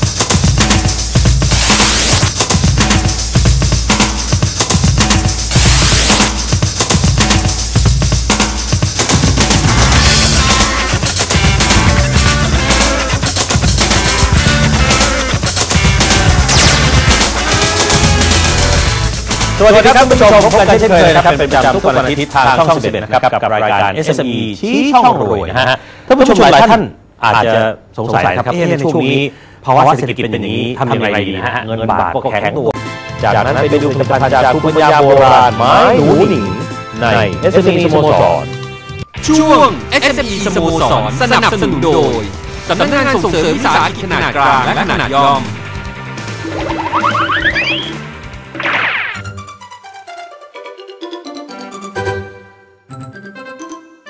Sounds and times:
Speech: 19.6s - 38.5s, 39.2s - 45.5s.

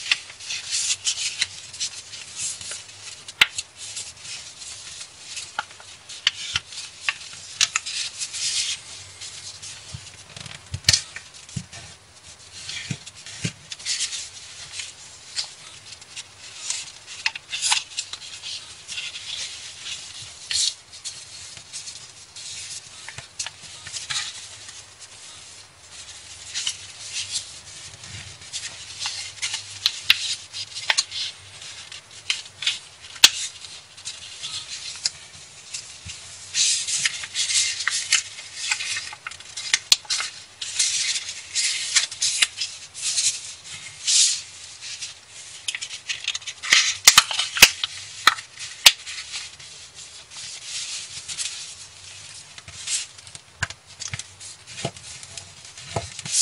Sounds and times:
Inside, small room: 0.0s - 56.4s.

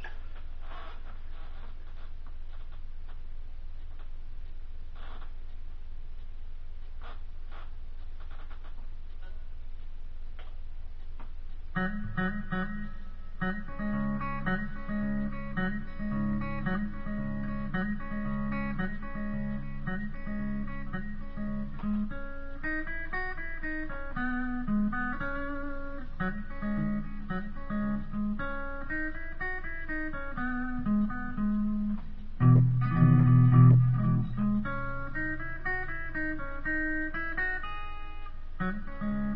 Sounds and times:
Guitar: 0.0s - 3.2s, 3.8s - 5.5s, 6.1s - 39.3s.

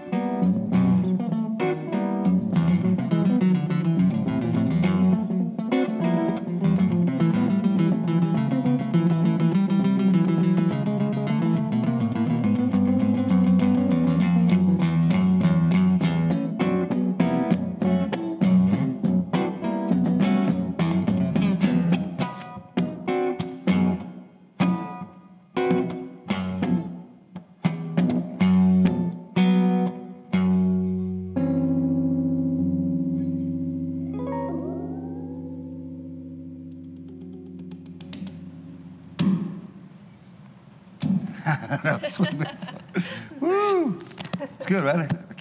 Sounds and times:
Strum: 0.0s - 40.2s.

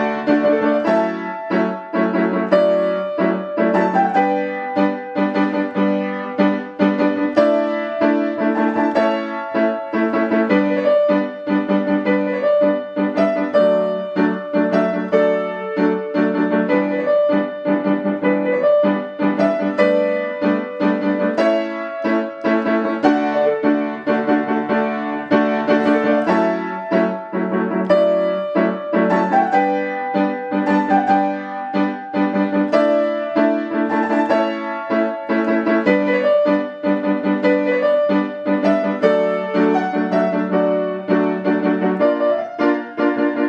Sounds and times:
Music: 0.0s - 43.4s.

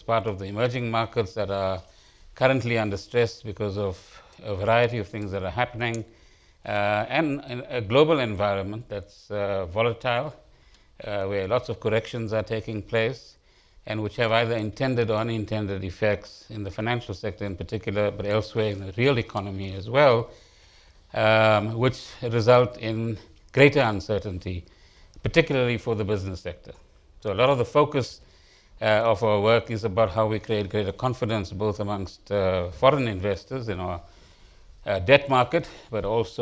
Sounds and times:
Speech: 0.0s - 10.4s, 11.0s - 20.3s, 21.1s - 28.2s, 28.8s - 34.1s, 34.8s - 36.4s.

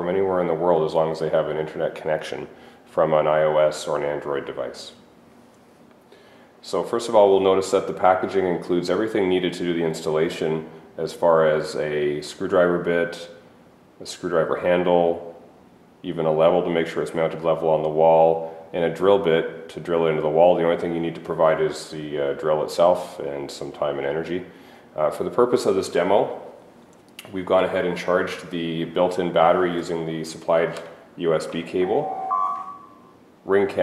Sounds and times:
Speech: 0.0s - 5.0s, 6.6s - 13.4s, 14.0s - 15.4s, 16.0s - 26.6s, 27.2s - 32.2s, 33.4s - 33.8s.

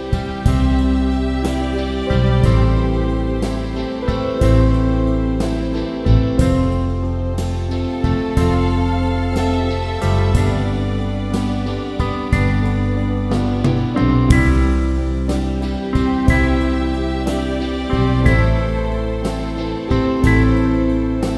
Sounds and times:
Tender music: 0.0s - 21.3s.

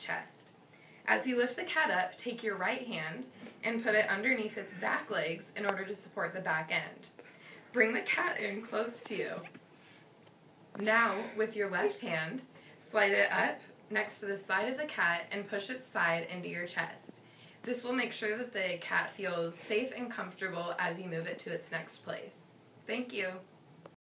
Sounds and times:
Speech: 0.0s - 0.5s, 1.1s - 7.1s, 7.8s - 9.5s, 10.8s - 23.5s.

